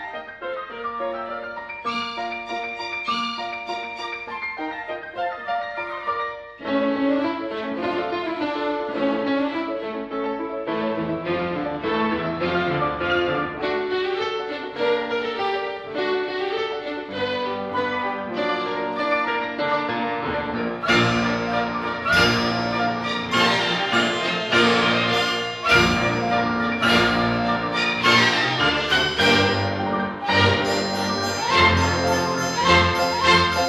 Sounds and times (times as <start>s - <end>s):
Violin, fiddle: 1.9s - 4.8s, 13.4s - 33.6s.